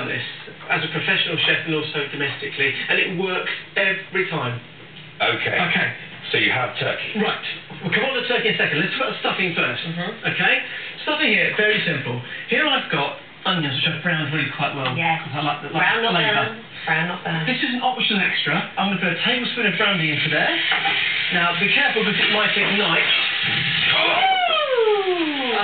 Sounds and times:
Speech: 0:00.0 - 0:20.7, 0:21.3 - 0:23.2.

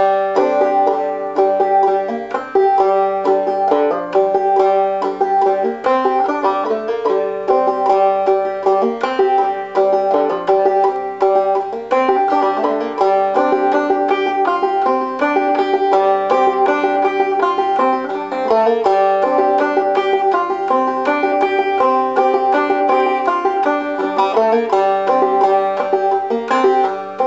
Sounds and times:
Banjo: 0:00.0 - 0:27.2.

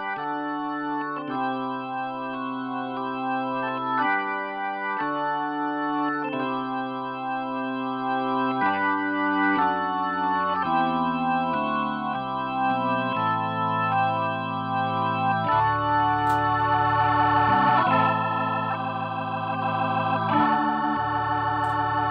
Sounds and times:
Music: 0:00.0 - 0:22.1.

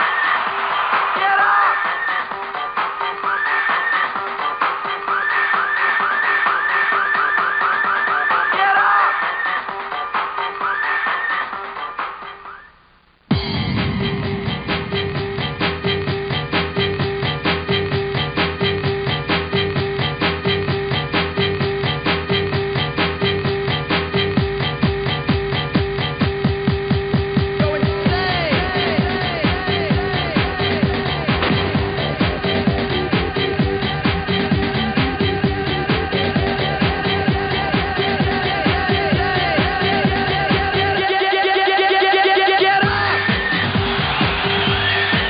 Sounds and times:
Music: 0:00.0 - 0:45.3.

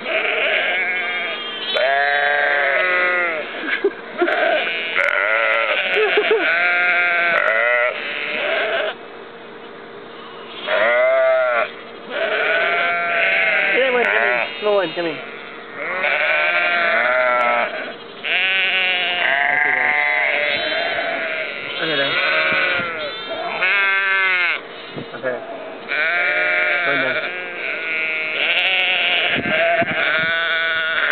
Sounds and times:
Bleat: 0:00.0 - 0:09.0, 0:10.5 - 0:24.6, 0:25.9 - 0:31.1.

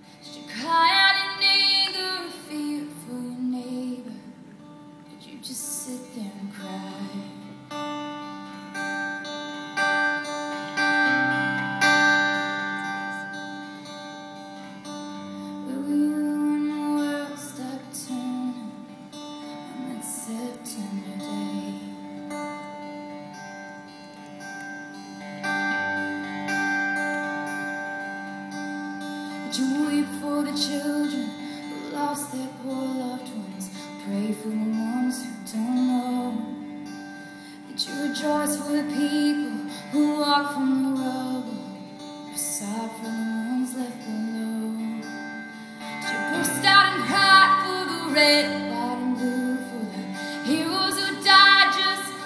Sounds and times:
Music: 0:00.0 - 0:52.2.

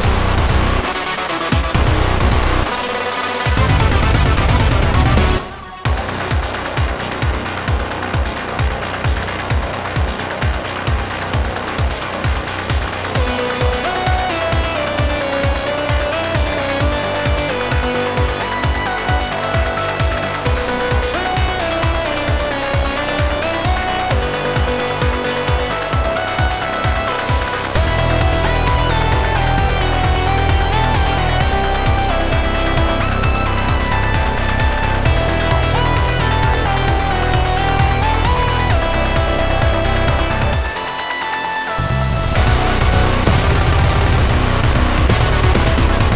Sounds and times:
Electronica: 0:00.0 - 0:46.1.

